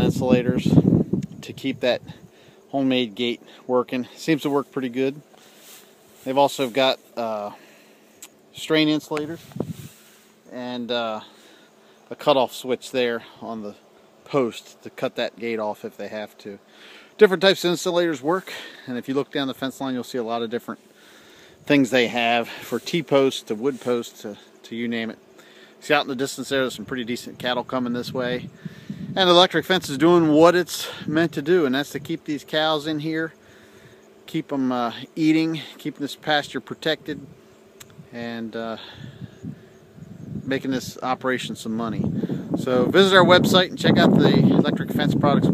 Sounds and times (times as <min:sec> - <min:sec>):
Speech: 0:00.0 - 0:00.8, 0:01.4 - 0:05.2, 0:06.2 - 0:07.6, 0:08.6 - 0:09.4, 0:10.5 - 0:11.3, 0:12.1 - 0:16.6, 0:17.2 - 0:20.8, 0:21.7 - 0:25.2, 0:25.8 - 0:28.5, 0:29.2 - 0:33.4, 0:34.3 - 0:37.3, 0:38.2 - 0:38.9, 0:40.5 - 0:45.5.